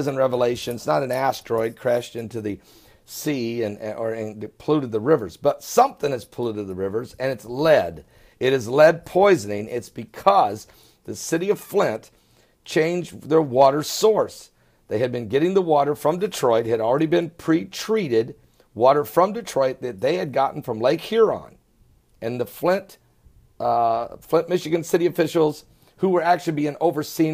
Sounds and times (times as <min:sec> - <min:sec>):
Speech: 0:00.0 - 0:12.1, 0:12.7 - 0:21.6, 0:22.2 - 0:23.0, 0:23.6 - 0:27.3.